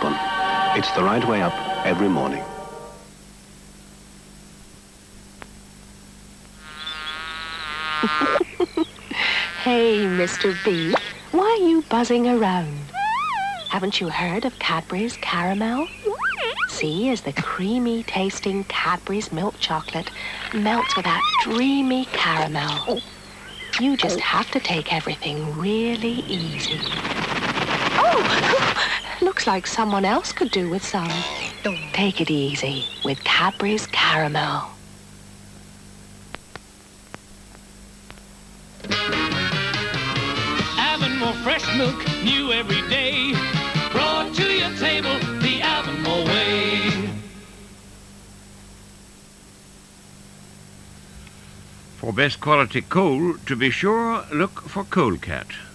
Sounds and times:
Television: 0:00.0 - 0:07.1, 0:08.8 - 0:12.9, 0:13.6 - 0:36.4, 0:37.6 - 0:50.9
Speech: 0:00.8 - 0:02.4, 0:09.6 - 0:12.9, 0:13.7 - 0:15.9, 0:16.7 - 0:23.0, 0:23.8 - 0:27.0, 0:29.2 - 0:34.8, 0:52.0 - 0:55.7.

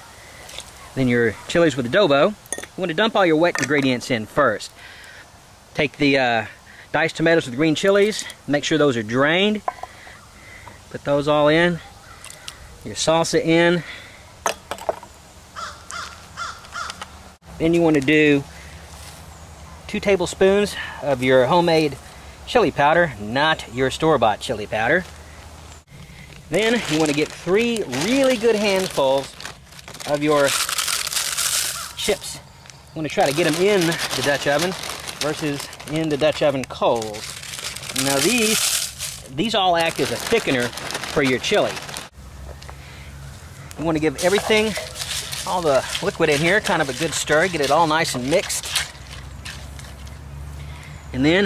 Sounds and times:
Outside, rural or natural: 0:00.0 - 0:51.4
Speech: 0:01.0 - 0:04.7, 0:05.8 - 0:09.6, 0:10.9 - 0:11.9, 0:12.8 - 0:13.9, 0:17.6 - 0:18.5, 0:19.9 - 0:25.1, 0:26.5 - 0:29.4, 0:30.0 - 0:30.6, 0:32.0 - 0:32.4, 0:33.0 - 0:37.3, 0:37.9 - 0:38.6, 0:39.3 - 0:41.8, 0:43.8 - 0:48.7, 0:51.1 - 0:51.4.

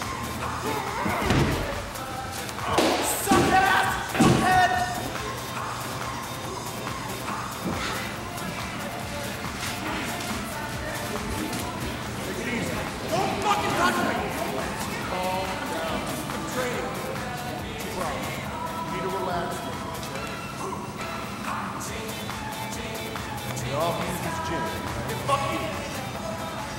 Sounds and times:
Music: 0:00.0 - 0:26.7.

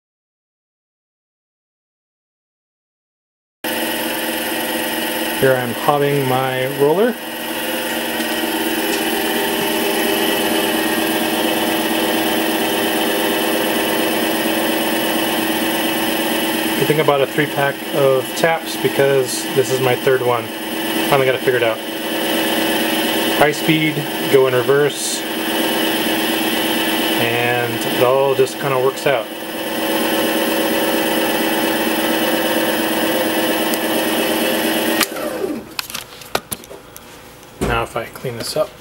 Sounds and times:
Speech: 0:05.4 - 0:07.2, 0:16.8 - 0:20.5, 0:21.1 - 0:21.8, 0:23.4 - 0:25.2, 0:27.2 - 0:29.3, 0:37.6 - 0:38.8.

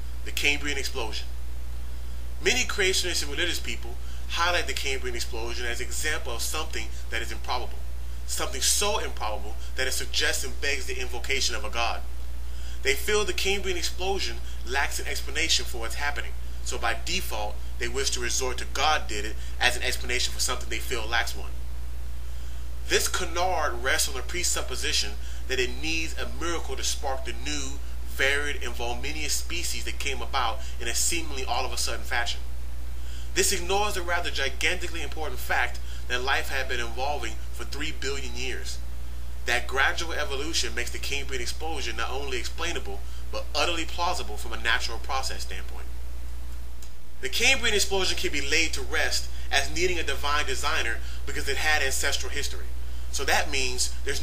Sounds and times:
Speech: 0:00.2 - 0:01.3, 0:02.4 - 0:12.1, 0:12.8 - 0:21.6, 0:22.9 - 0:32.4, 0:33.4 - 0:38.8, 0:39.5 - 0:45.9, 0:47.2 - 0:54.2.

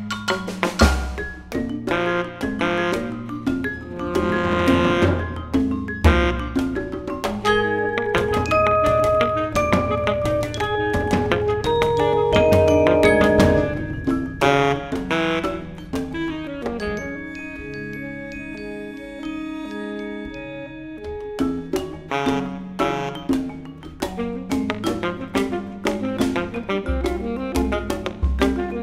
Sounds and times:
Drum: 0:00.0 - 0:18.0, 0:21.1 - 0:28.8
Jazz: 0:00.0 - 0:28.8
Marimba, xylophone: 0:00.0 - 0:28.8
Saxophone: 0:01.9 - 0:05.5, 0:06.1 - 0:23.5, 0:24.2 - 0:28.8.

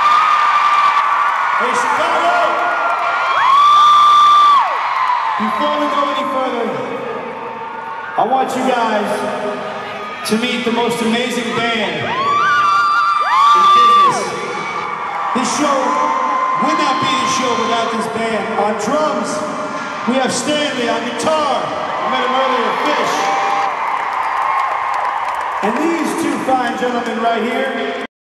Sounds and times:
Male speech, man speaking: 0:01.6 - 0:02.6, 0:05.4 - 0:06.9, 0:08.2 - 0:09.4, 0:10.2 - 0:12.1, 0:13.6 - 0:14.4, 0:15.4 - 0:19.5, 0:20.1 - 0:23.4, 0:25.6 - 0:28.1.

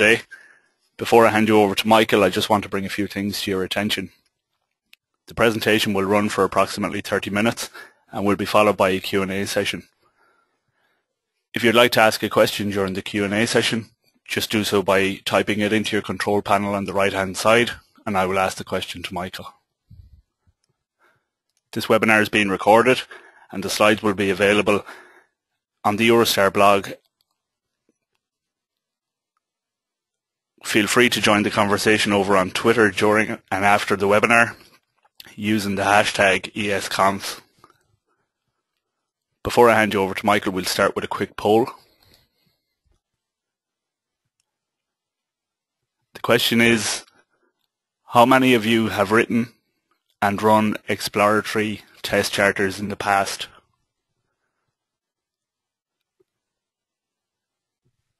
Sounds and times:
Speech: 0:00.0 - 0:04.2, 0:05.3 - 0:09.9, 0:11.5 - 0:20.1, 0:21.7 - 0:25.1, 0:25.8 - 0:27.1, 0:30.6 - 0:37.6, 0:39.4 - 0:41.9, 0:46.1 - 0:47.2, 0:48.1 - 0:49.6, 0:50.2 - 0:53.6.

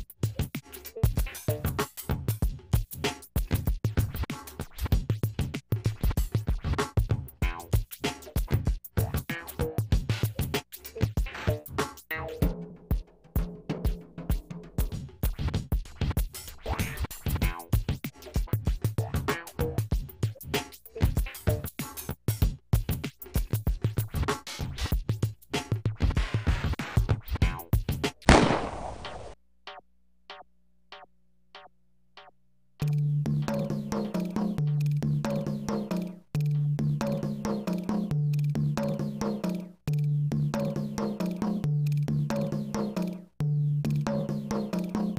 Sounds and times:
Music: 0:00.0 - 0:28.3, 0:29.7 - 0:45.1.

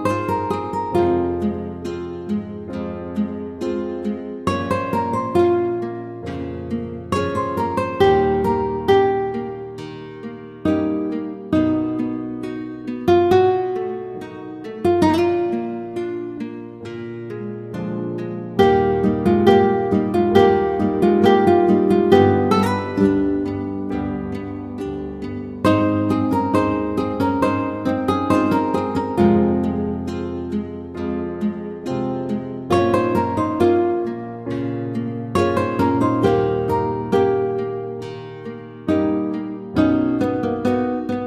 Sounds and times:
Harp: 0:00.0 - 0:41.2.

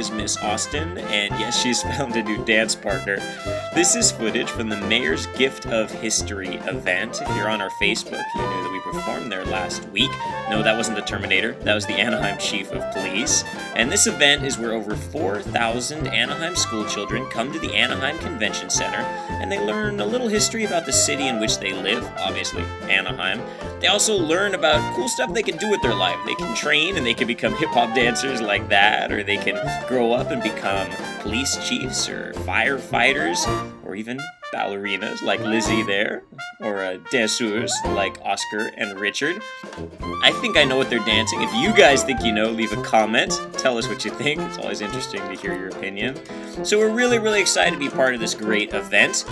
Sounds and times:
Speech: 0:00.0 - 0:39.5, 0:40.2 - 0:49.3
Music: 0:00.0 - 0:49.3.

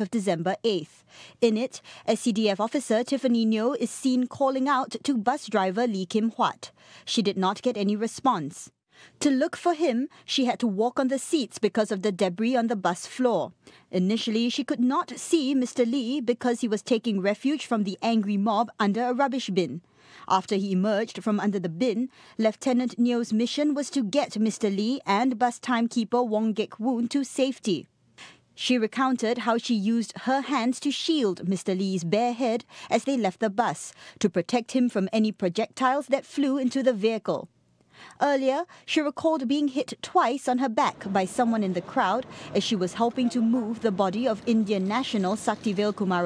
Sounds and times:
Speech: 0:00.0 - 0:27.9, 0:28.6 - 0:37.5, 0:38.1 - 0:46.2.

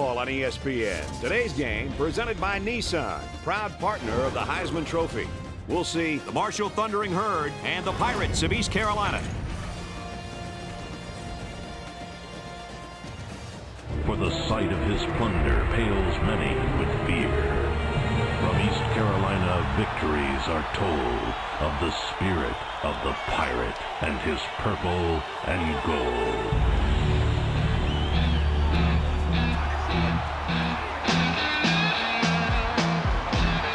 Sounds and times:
Speech: 0:00.0 - 0:09.3, 0:14.0 - 0:17.8, 0:18.4 - 0:26.6
Music: 0:00.0 - 0:33.7.

